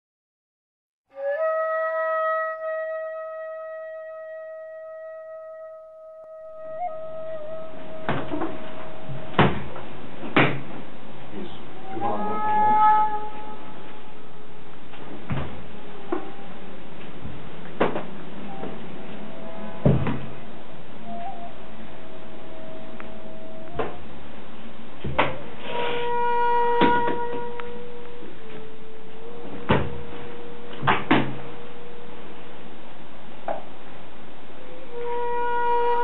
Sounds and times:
Music: 0:01.1 - 0:36.0
Speech: 0:11.3 - 0:12.9.

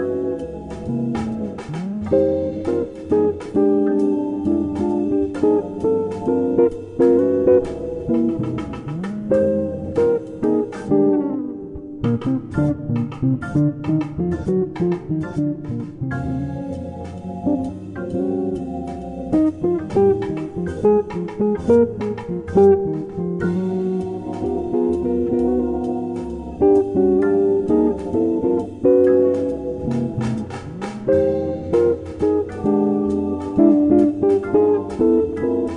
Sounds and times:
Acoustic guitar: 0:00.0 - 0:35.7
Electric guitar: 0:00.0 - 0:35.7
Strum: 0:00.0 - 0:35.7.

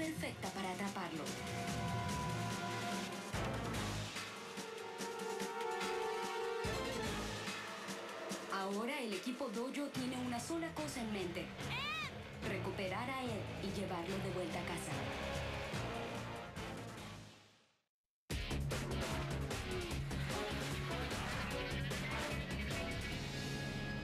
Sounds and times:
Speech: 0:00.0 - 0:01.4, 0:08.5 - 0:15.1
Music: 0:00.0 - 0:17.7, 0:18.3 - 0:24.0.

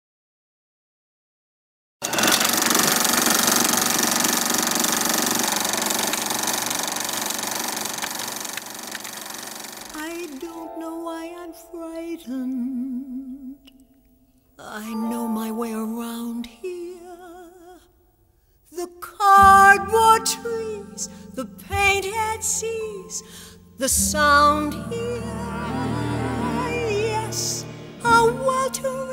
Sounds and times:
Sewing machine: 0:02.0 - 0:10.4.

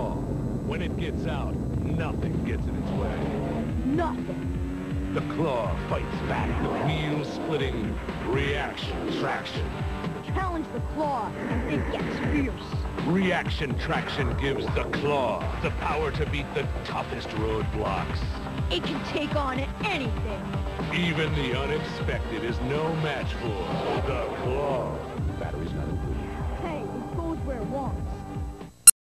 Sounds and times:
Speech: 0:00.0 - 0:04.4, 0:05.2 - 0:28.2
Music: 0:00.0 - 0:28.9.

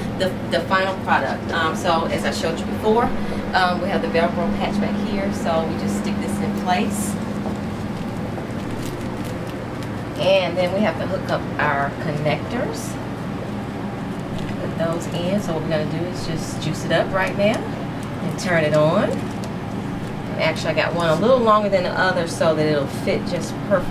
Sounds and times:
Speech: 0:00.2 - 0:07.2, 0:10.2 - 0:13.0, 0:14.6 - 0:19.2, 0:20.4 - 0:23.9.

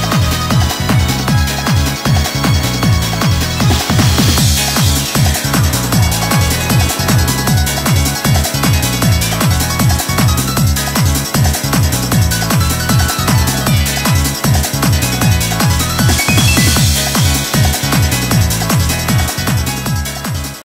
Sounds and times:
Music: 0:00.0 - 0:20.6.

